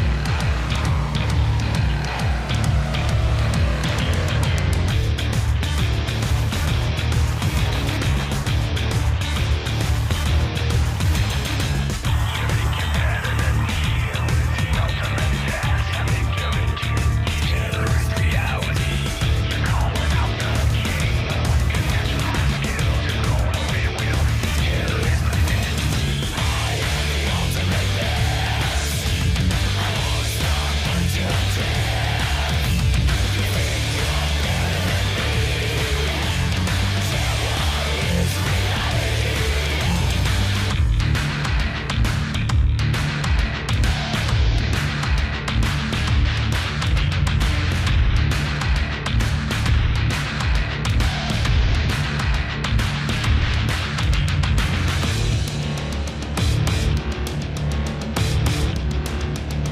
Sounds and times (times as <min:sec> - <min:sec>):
Music: 0:00.0 - 0:59.7.